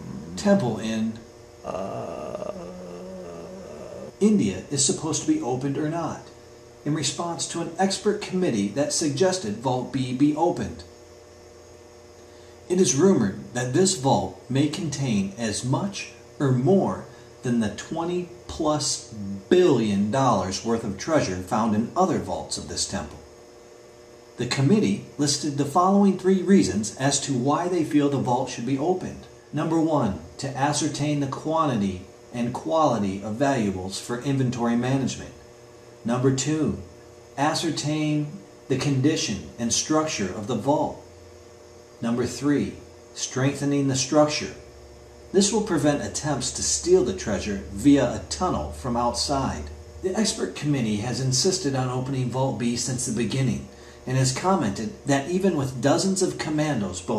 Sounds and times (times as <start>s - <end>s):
Speech: 0.0s - 6.3s, 6.9s - 10.9s, 12.7s - 23.2s, 24.4s - 35.4s, 36.0s - 41.0s, 42.0s - 44.6s, 45.3s - 57.1s.